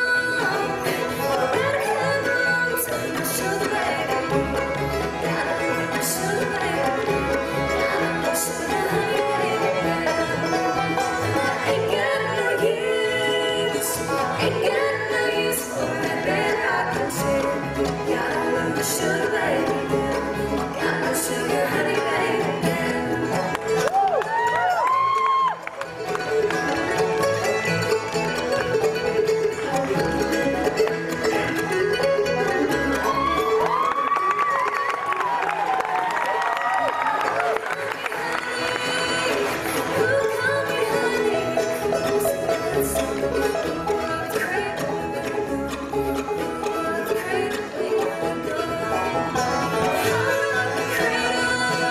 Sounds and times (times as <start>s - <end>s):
Female singing: 0.0s - 23.9s, 37.4s - 51.9s
Choir: 11.2s - 20.2s.